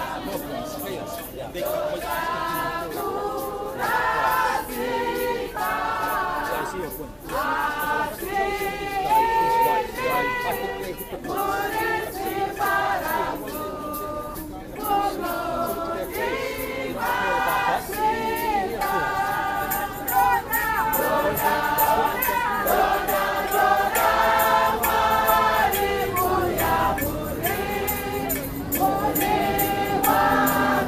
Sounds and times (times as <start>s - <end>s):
Speech: 0.0s - 3.3s, 6.4s - 23.0s.